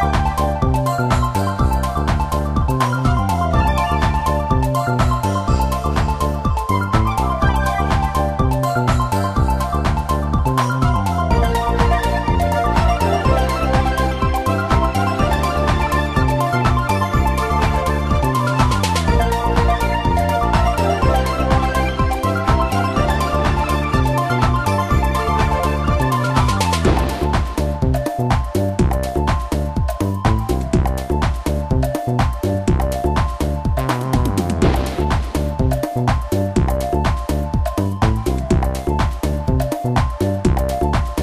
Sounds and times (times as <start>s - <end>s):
Theme music: 0.0s - 29.7s, 33.4s - 36.9s.